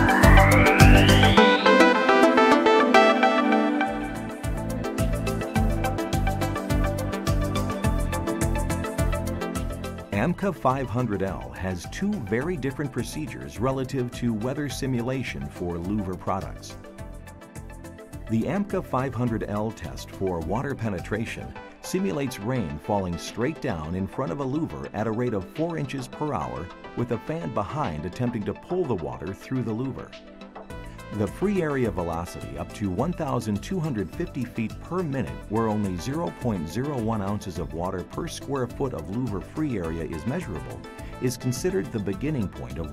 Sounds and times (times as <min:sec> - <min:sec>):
Music: 0:00.0 - 0:42.9
Speech: 0:10.1 - 0:16.8, 0:18.3 - 0:30.2, 0:31.1 - 0:42.9.